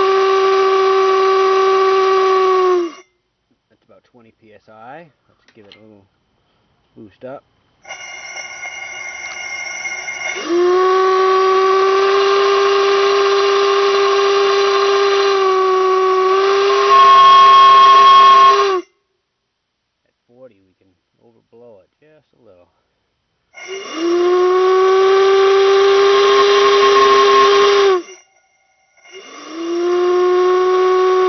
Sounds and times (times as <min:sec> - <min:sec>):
Steam whistle: 0:00.0 - 0:03.1, 0:07.8 - 0:19.0, 0:23.6 - 0:31.2.